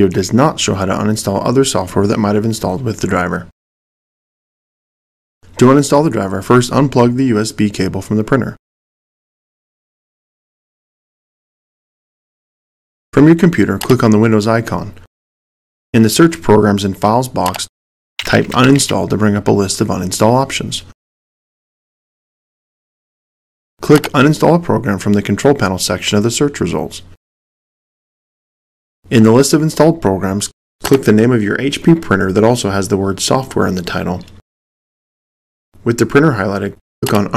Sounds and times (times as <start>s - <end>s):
Speech: 0.0s - 3.6s, 5.6s - 8.6s, 13.2s - 15.1s, 16.0s - 21.0s, 23.8s - 27.2s, 29.1s - 34.4s, 35.8s - 37.3s.